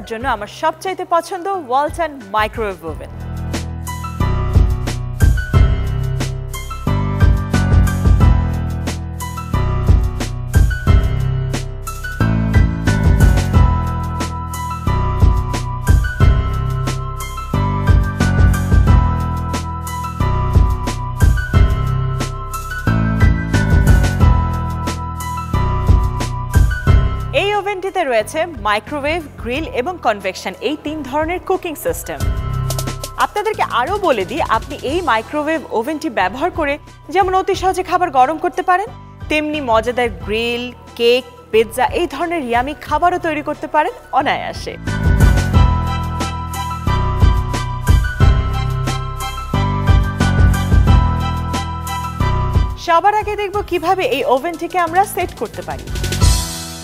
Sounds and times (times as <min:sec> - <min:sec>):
Speech: 0:00.0 - 0:03.2, 0:27.4 - 0:32.2, 0:33.2 - 0:44.8, 0:52.8 - 0:55.9
Music: 0:00.0 - 0:56.8.